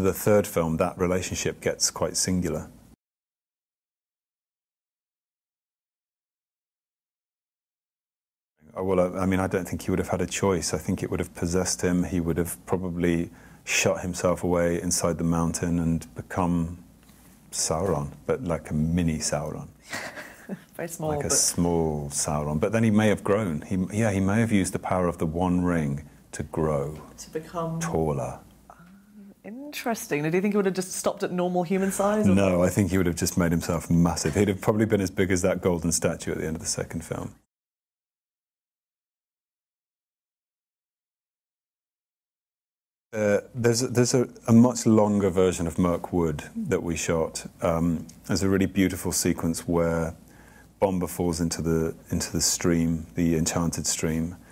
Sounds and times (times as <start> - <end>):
Speech: 0.0 - 2.7, 8.6 - 16.8, 17.5 - 19.7, 20.8 - 28.4, 29.2 - 37.4, 43.2 - 50.2, 50.8 - 54.4
Inside, small room: 0.0 - 3.0, 8.6 - 37.5, 43.2 - 54.5.